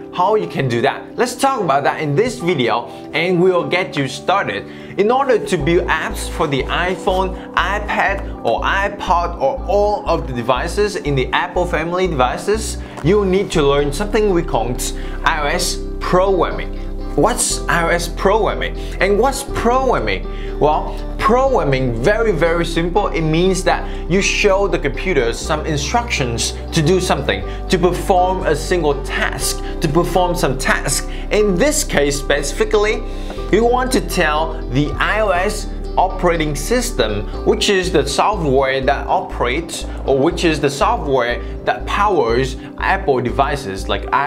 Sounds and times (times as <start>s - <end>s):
Music: 0.0s - 44.2s
Speech: 0.0s - 44.2s.